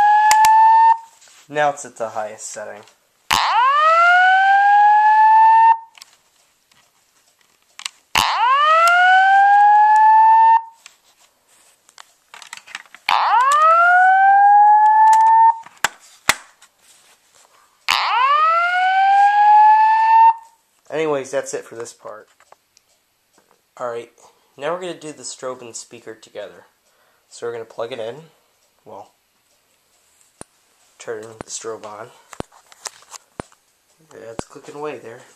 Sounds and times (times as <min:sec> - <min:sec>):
Speech: 0:01.5 - 0:03.0, 0:20.9 - 0:22.3, 0:23.8 - 0:29.2, 0:31.0 - 0:32.3, 0:34.0 - 0:35.3.